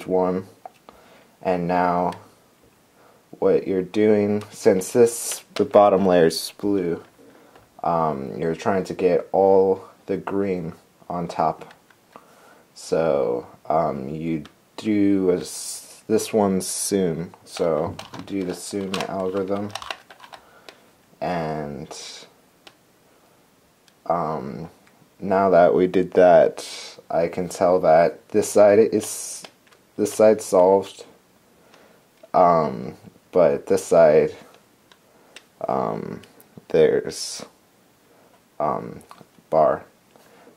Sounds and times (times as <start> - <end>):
Speech: 0.0 - 0.6, 1.4 - 2.3, 3.4 - 7.1, 7.8 - 11.8, 12.8 - 19.8, 21.2 - 22.4, 24.0 - 31.2, 32.3 - 34.6, 35.6 - 37.6, 38.6 - 39.9.